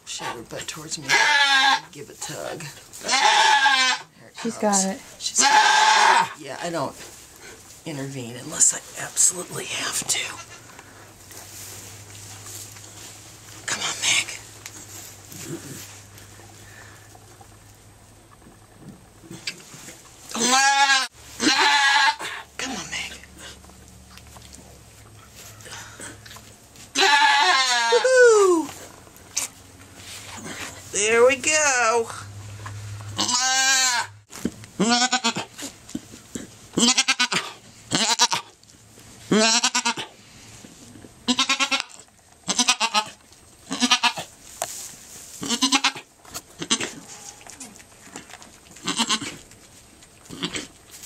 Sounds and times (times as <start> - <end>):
Bleat: 1.1 - 1.9, 3.0 - 4.1, 5.4 - 6.4, 20.4 - 22.3, 27.0 - 28.0, 33.2 - 34.2, 34.8 - 35.5, 36.8 - 38.5, 39.3 - 40.1, 41.3 - 44.3, 45.4 - 47.5, 48.8 - 49.4.